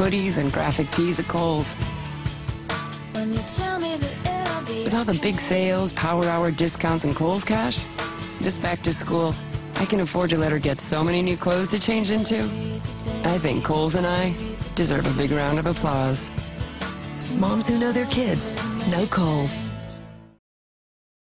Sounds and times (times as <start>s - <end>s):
Speech: 0.0s - 1.8s, 4.7s - 7.8s, 8.4s - 12.6s, 13.2s - 16.3s, 17.2s - 19.7s
Music: 0.0s - 20.4s.